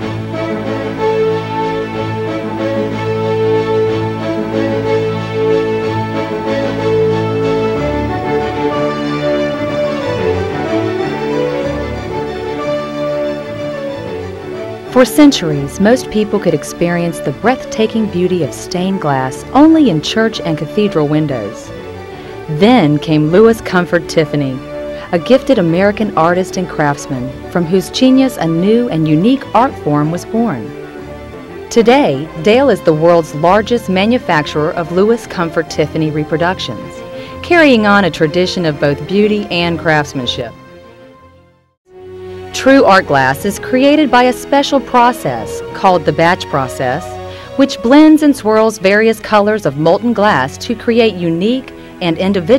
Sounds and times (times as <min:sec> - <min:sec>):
Music: 0:00.0 - 0:52.5
Speech: 0:14.9 - 0:21.7, 0:22.5 - 0:30.7, 0:31.8 - 0:40.6, 0:42.6 - 0:52.5.